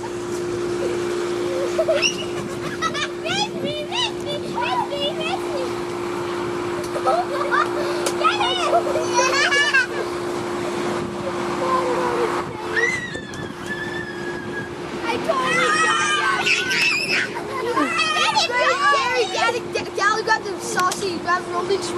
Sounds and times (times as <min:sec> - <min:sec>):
Outside, urban or manmade: 0:00.0 - 0:21.9
Child speech, kid speaking: 0:03.2 - 0:05.8, 0:07.0 - 0:09.7, 0:11.5 - 0:13.2, 0:15.0 - 0:21.9.